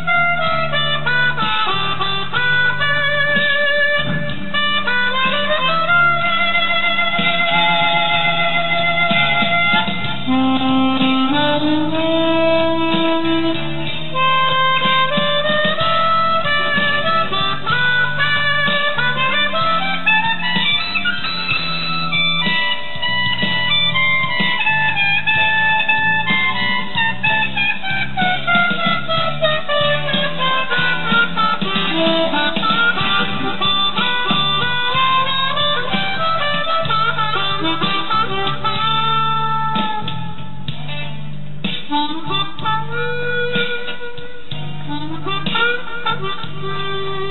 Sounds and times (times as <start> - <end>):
Harmonica: 0.0 - 40.8, 41.6 - 47.3
Wind instrument, woodwind instrument: 0.0 - 47.3.